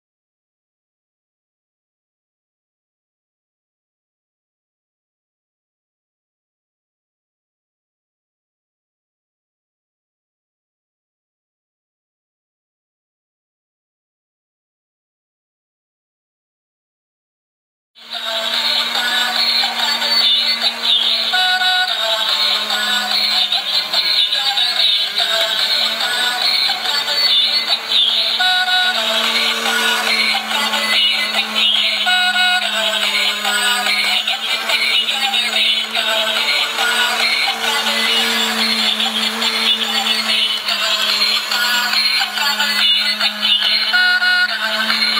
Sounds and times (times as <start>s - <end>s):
Music: 18.0s - 45.1s.